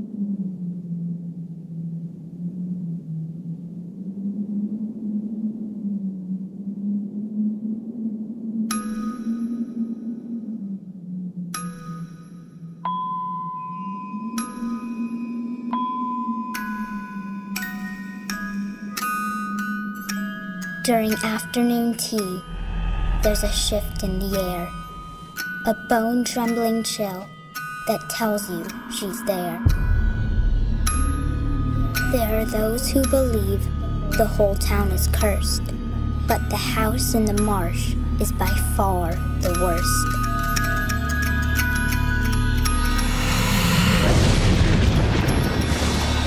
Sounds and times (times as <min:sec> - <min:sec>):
Glockenspiel: 0:11.6 - 0:44.0.